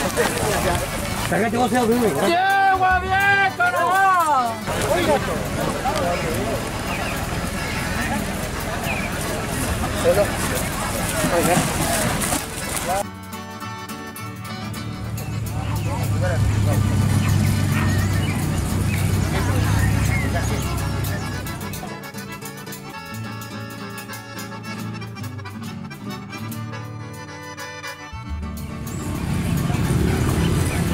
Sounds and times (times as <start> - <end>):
Music: 0.0 - 30.9
Speech: 0.3 - 13.0.